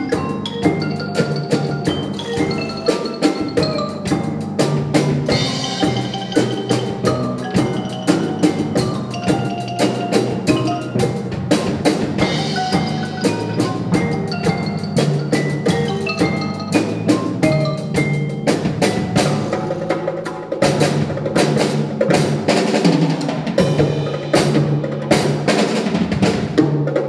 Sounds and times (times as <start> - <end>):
Bass drum: 0.0 - 27.0
Drum kit: 0.0 - 27.0.